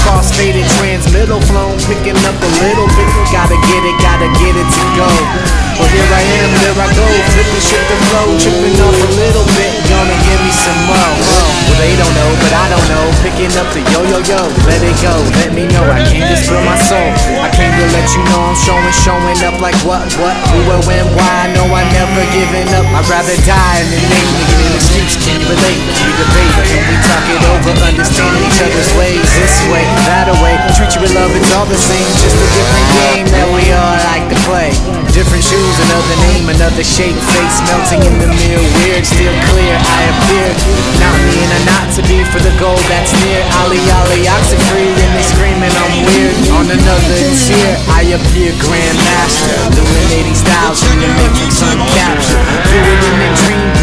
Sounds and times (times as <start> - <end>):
Music: 0.0 - 53.8
Speech: 0.0 - 53.8.